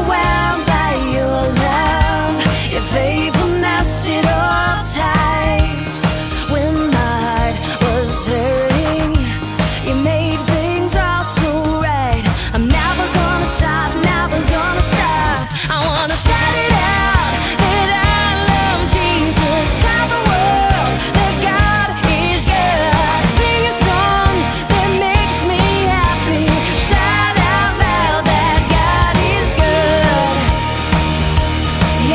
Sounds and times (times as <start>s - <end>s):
Music: 0.0s - 32.1s.